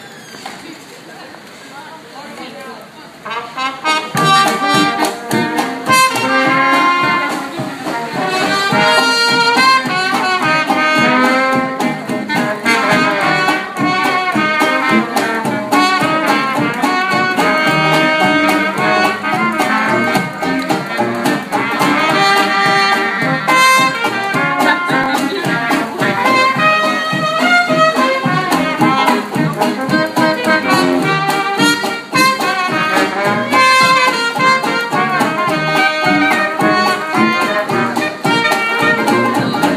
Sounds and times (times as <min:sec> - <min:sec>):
Music: 0:03.2 - 0:39.7.